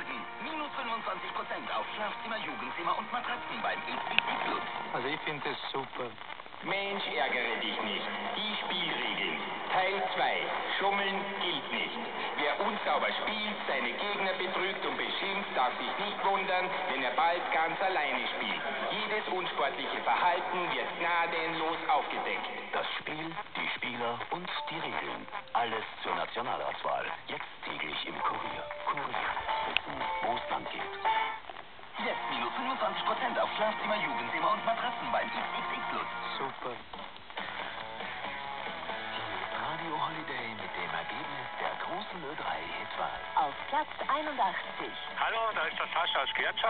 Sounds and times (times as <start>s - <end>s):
Speech: 0.0s - 31.0s, 32.0s - 36.9s, 39.1s - 46.6s
Radio: 0.0s - 46.6s.